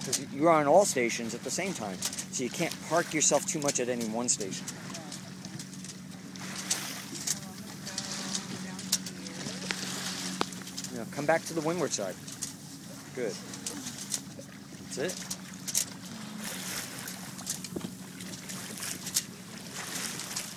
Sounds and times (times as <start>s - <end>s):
Sailboat, sailing ship: 0.0s - 20.5s
Speech: 0.1s - 5.2s, 10.9s - 12.2s, 13.1s - 13.9s, 14.9s - 15.2s.